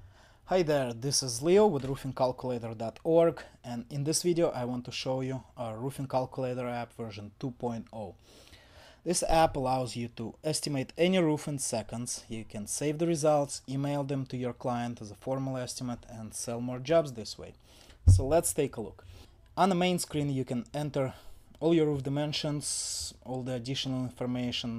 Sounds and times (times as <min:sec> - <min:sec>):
Speech: 0:00.5 - 0:08.2, 0:09.1 - 0:19.0, 0:19.6 - 0:24.7.